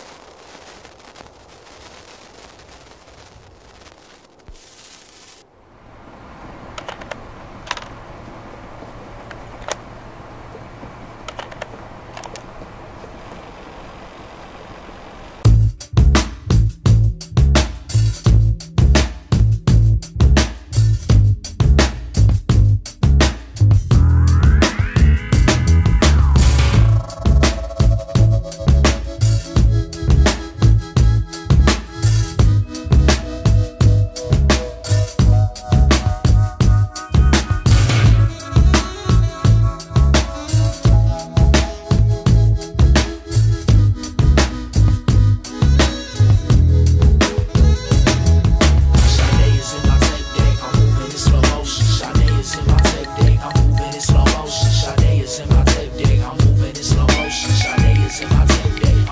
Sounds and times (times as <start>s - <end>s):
Music: 15.4s - 59.1s.